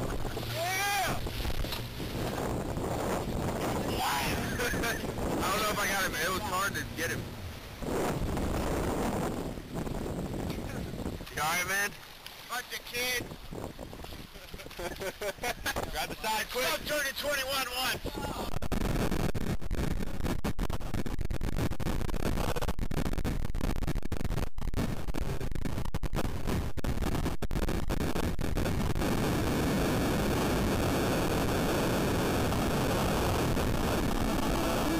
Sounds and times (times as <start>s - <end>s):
Speech: 5.4s - 7.2s, 11.4s - 13.2s, 16.0s - 18.5s.